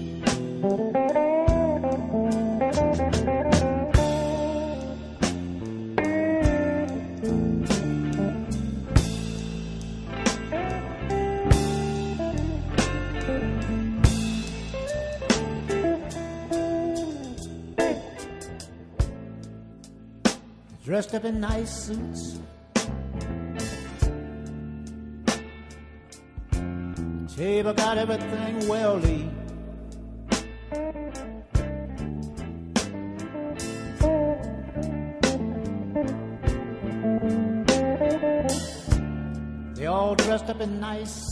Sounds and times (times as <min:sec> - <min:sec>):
Music: 0:00.0 - 0:41.3.